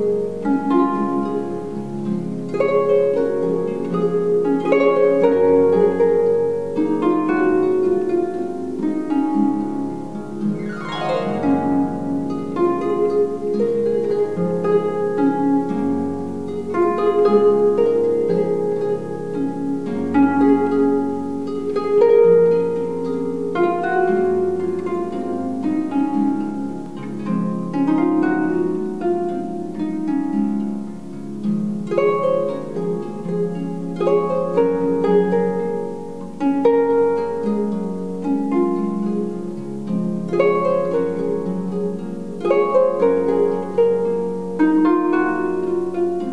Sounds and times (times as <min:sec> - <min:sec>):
Harp: 0:00.0 - 0:46.3
Plucked string instrument: 0:00.0 - 0:46.3.